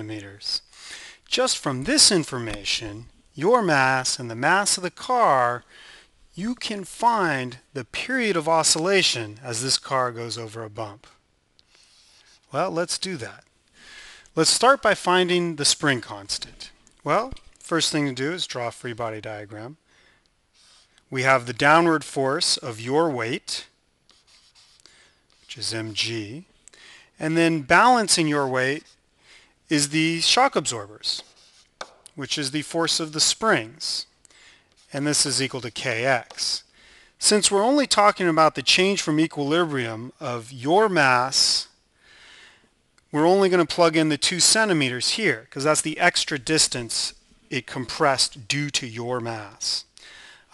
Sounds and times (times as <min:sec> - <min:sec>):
Speech: 0:00.0 - 0:00.7, 0:01.3 - 0:05.7, 0:06.4 - 0:11.2, 0:12.5 - 0:13.5, 0:14.4 - 0:19.8, 0:21.1 - 0:23.8, 0:25.5 - 0:26.5, 0:27.2 - 0:29.0, 0:29.7 - 0:31.3, 0:32.2 - 0:34.1, 0:34.9 - 0:41.8, 0:43.1 - 0:49.9.